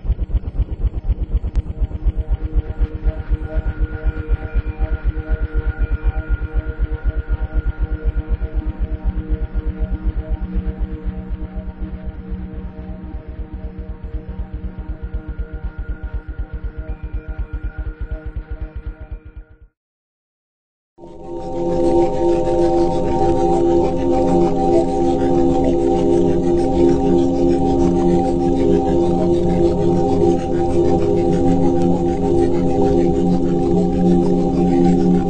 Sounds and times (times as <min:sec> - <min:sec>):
Music: 0:00.0 - 0:19.8, 0:21.0 - 0:35.2.